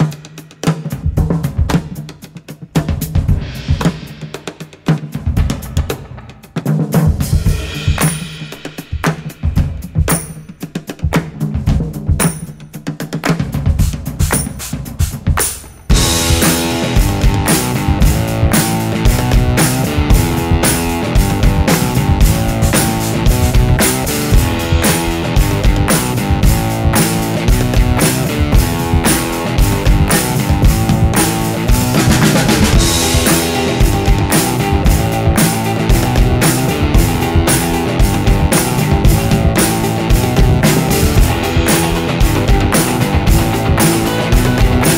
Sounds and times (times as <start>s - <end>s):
Bass drum: 0.0s - 44.9s
Drum kit: 0.0s - 44.9s
Rimshot: 3.2s - 10.6s, 14.2s - 44.9s.